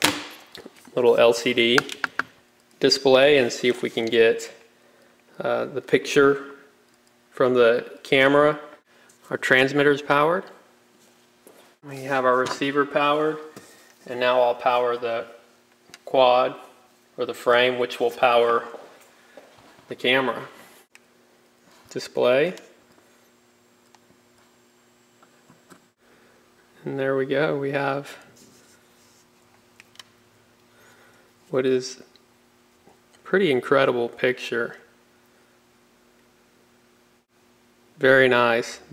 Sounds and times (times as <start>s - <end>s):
Speech: 0.9s - 1.9s, 2.8s - 4.6s, 5.4s - 6.6s, 7.4s - 10.6s, 11.8s - 15.4s, 16.1s - 18.8s, 19.9s - 20.5s, 21.9s - 22.7s, 26.8s - 28.3s, 31.5s - 32.1s, 33.2s - 34.9s, 38.0s - 38.9s.